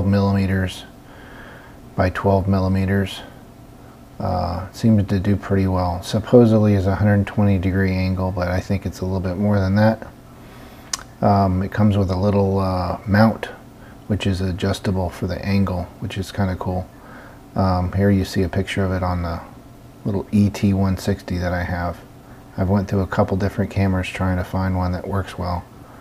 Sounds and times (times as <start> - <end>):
Speech: 0.0 - 1.0, 2.0 - 3.4, 4.2 - 10.2, 11.0 - 16.9, 17.6 - 25.7.